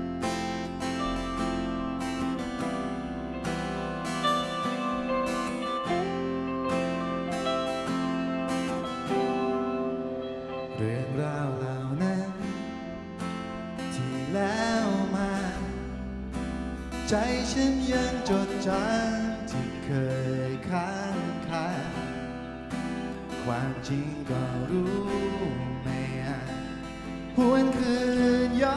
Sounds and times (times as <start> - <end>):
Music: 0.0 - 28.7.